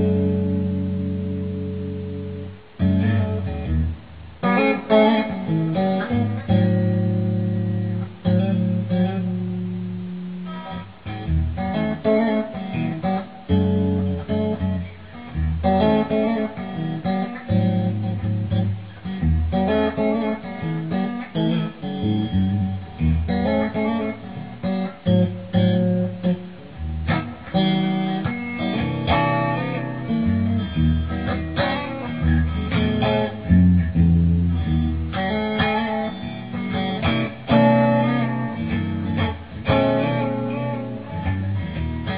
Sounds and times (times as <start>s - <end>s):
Electric guitar: 0.0s - 42.1s
Strum: 0.0s - 42.1s.